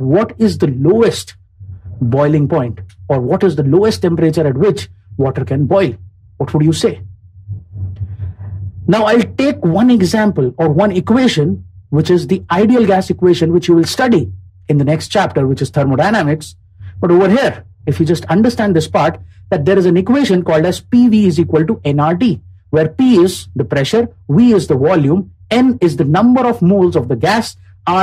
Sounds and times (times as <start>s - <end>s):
Speech: 0.0s - 7.0s, 7.8s - 28.0s.